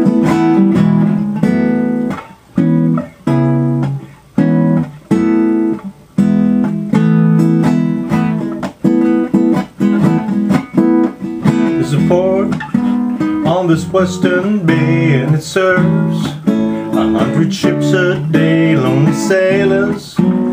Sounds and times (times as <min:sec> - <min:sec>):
Acoustic guitar: 0:00.0 - 0:20.5
Strum: 0:00.0 - 0:20.5.